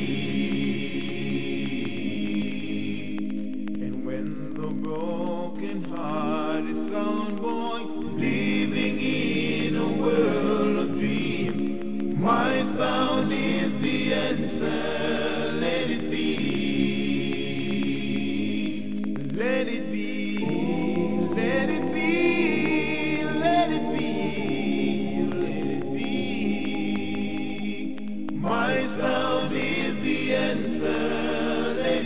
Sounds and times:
Music: 0.0s - 32.0s.

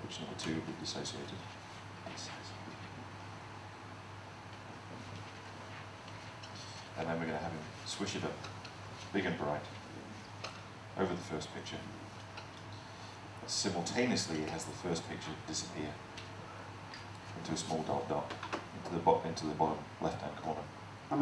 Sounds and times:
Speech: 0.0s - 1.5s, 7.0s - 8.5s, 9.1s - 9.8s, 11.0s - 12.0s, 13.4s - 16.0s, 17.4s - 21.2s.

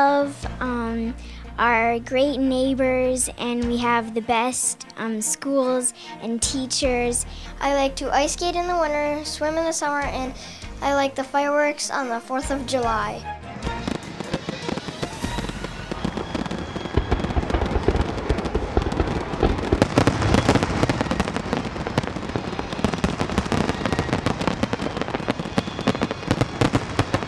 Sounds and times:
Speech: 0.0s - 13.2s
Music: 0.0s - 27.2s
Fireworks: 13.6s - 27.2s.

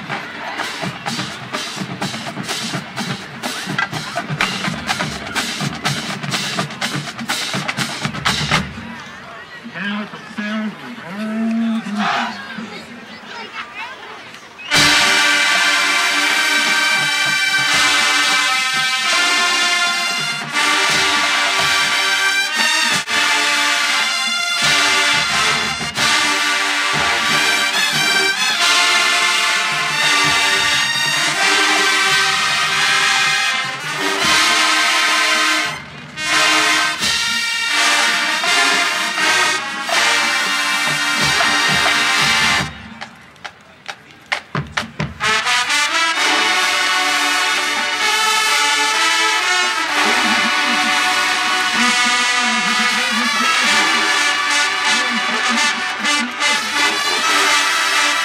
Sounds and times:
Music: 0.0s - 8.9s, 14.7s - 43.6s, 44.3s - 58.2s
Speech: 8.8s - 14.6s, 51.7s - 57.3s.

